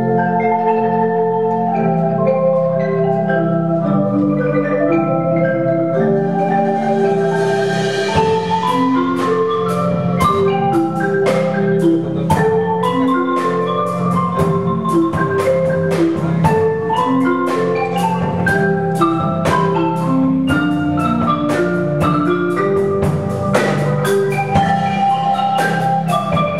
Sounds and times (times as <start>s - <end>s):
Drum kit: 1.1s - 26.5s.